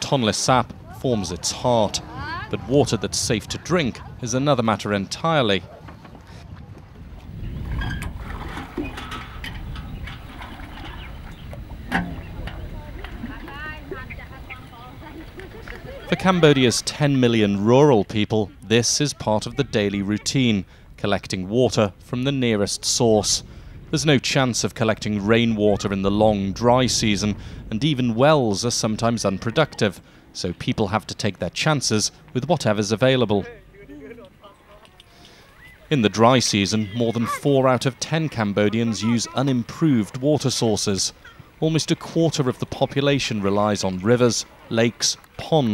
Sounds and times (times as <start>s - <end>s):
Speech: 16.1s - 35.0s, 35.9s - 45.7s.